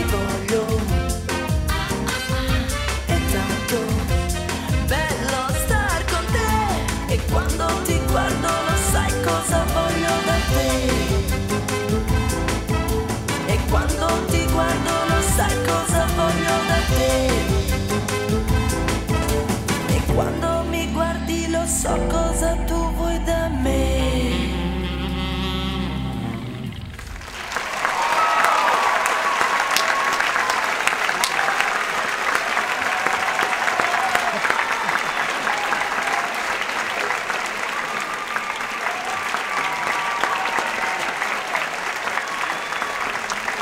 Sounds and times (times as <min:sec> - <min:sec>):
Applause: 0:27.0 - 0:43.6.